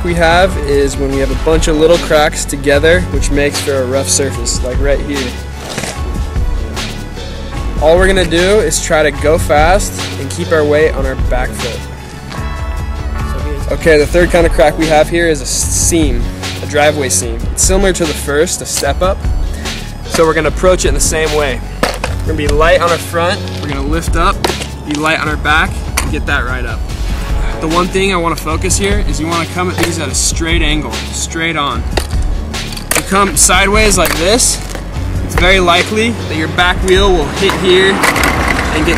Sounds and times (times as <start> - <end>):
Music: 0.0 - 38.9.